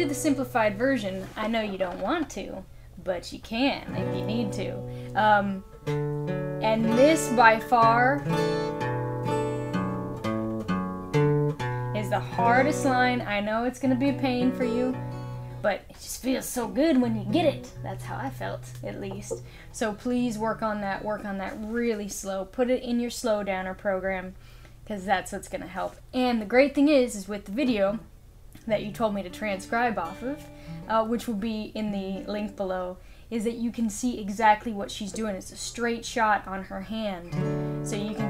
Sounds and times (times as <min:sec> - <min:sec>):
Acoustic guitar: 0:00.0 - 0:02.5, 0:03.8 - 0:22.3, 0:28.6 - 0:32.8, 0:34.4 - 0:38.3
Speech: 0:00.0 - 0:05.6, 0:06.6 - 0:08.2, 0:12.0 - 0:15.0, 0:15.6 - 0:37.3, 0:37.9 - 0:38.3.